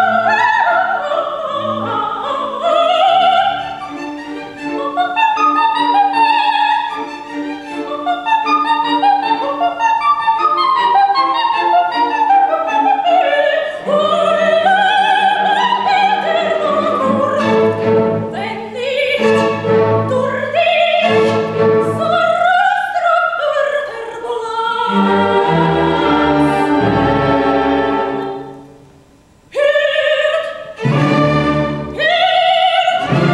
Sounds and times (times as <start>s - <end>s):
Opera: 0.0s - 33.3s.